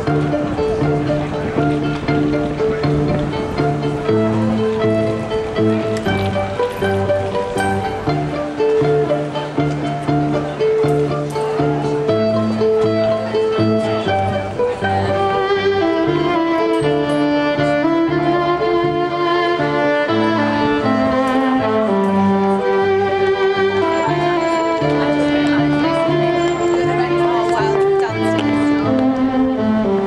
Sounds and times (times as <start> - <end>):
Violin, fiddle: 0.0 - 30.0.